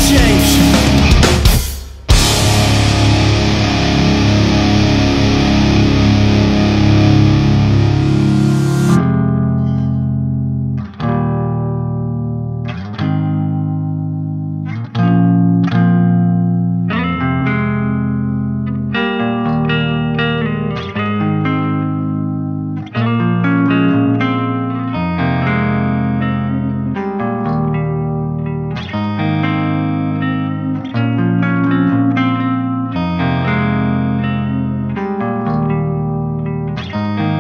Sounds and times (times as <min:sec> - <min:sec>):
Bass guitar: 0:00.0 - 0:37.4
Electronic tuner: 0:00.0 - 0:37.4.